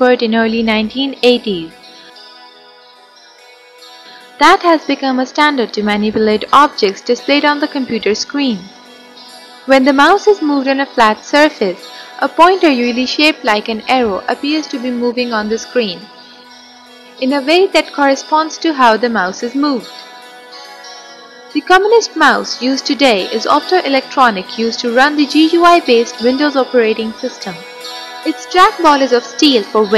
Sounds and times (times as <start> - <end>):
Speech: 0.0 - 1.7, 4.4 - 8.7, 9.7 - 16.1, 17.2 - 19.9, 21.6 - 27.6, 28.3 - 29.9
Music: 0.0 - 29.9.